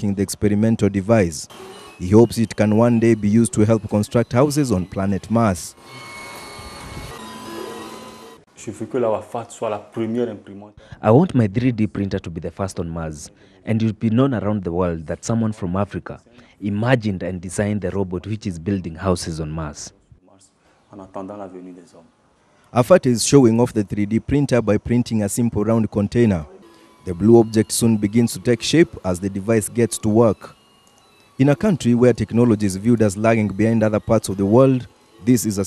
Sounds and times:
Speech: 0.0s - 5.8s, 8.6s - 22.1s, 22.8s - 30.5s, 31.4s - 35.6s.

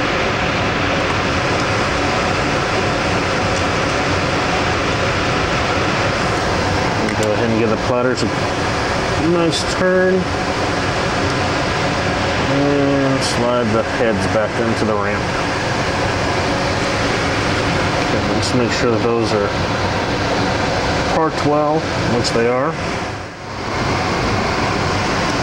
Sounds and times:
Speech: 7.0s - 8.3s, 9.2s - 10.3s, 12.5s - 15.3s, 18.1s - 19.6s, 21.1s - 22.8s.

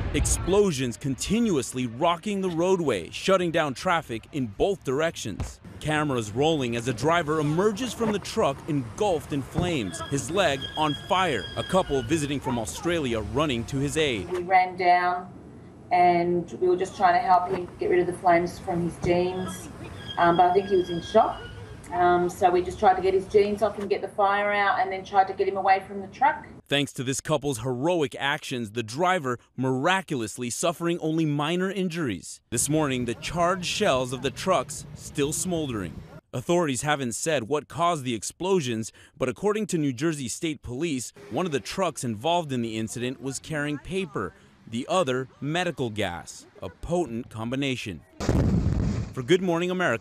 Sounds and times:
Speech: 0.0s - 15.3s, 15.9s - 48.0s, 49.2s - 50.0s.

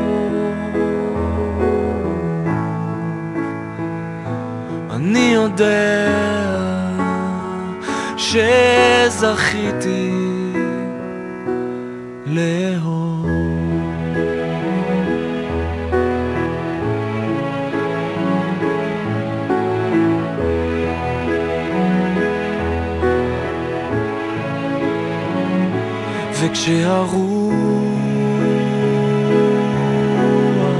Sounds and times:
Background music: 0.0s - 30.7s.

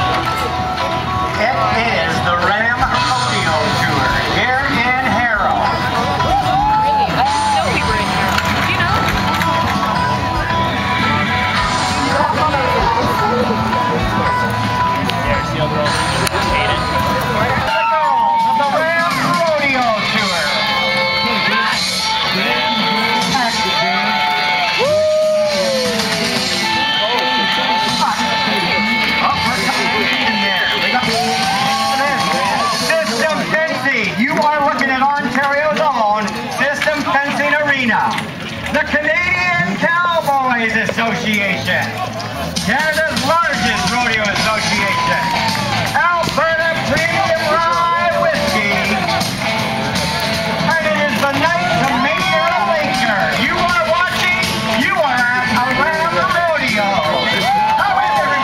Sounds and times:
Speech: 1.4s - 6.0s, 12.0s - 24.5s, 26.6s - 49.2s, 50.6s - 58.4s.

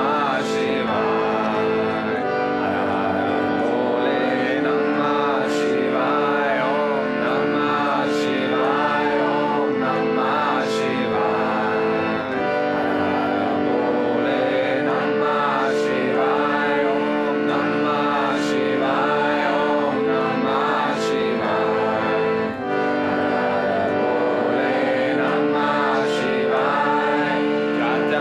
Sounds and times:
Mantra: 0.0s - 22.2s, 23.4s - 28.2s.

